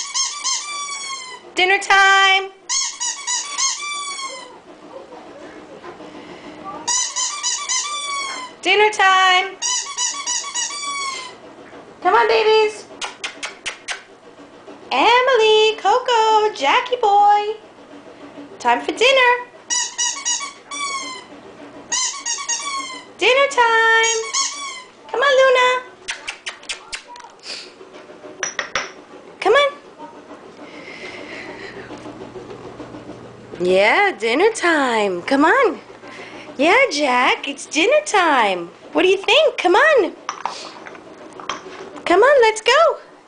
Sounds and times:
Squeak: 0.0s - 1.5s, 2.7s - 4.6s, 6.9s - 8.6s, 9.6s - 11.4s, 19.7s - 23.1s, 24.0s - 25.0s
Speech: 1.6s - 2.6s, 4.4s - 6.0s, 6.6s - 6.9s, 8.2s - 9.6s, 12.0s - 12.9s, 14.9s - 17.6s, 18.6s - 19.5s, 23.2s - 24.3s, 25.1s - 27.4s, 29.4s - 30.3s, 33.6s - 35.8s, 36.6s - 40.2s, 42.1s - 43.1s.

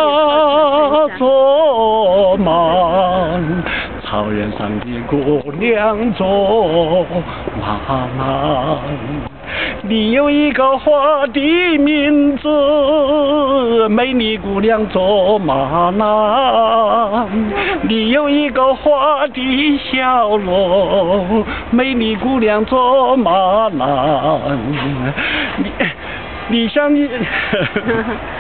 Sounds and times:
Male singing: 0.0s - 25.2s, 26.5s - 27.3s.

